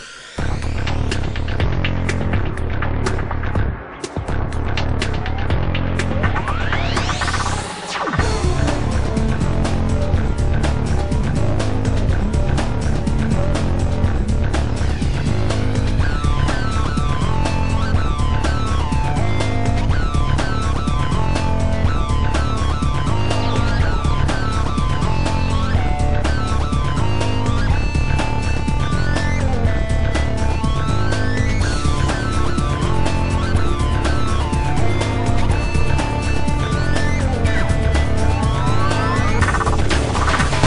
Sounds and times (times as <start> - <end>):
Music: 0.0 - 40.6.